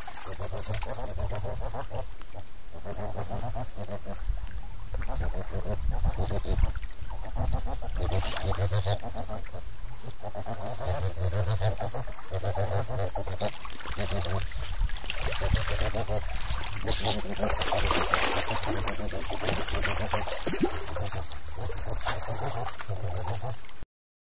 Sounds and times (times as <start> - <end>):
Water: 0.0 - 23.8.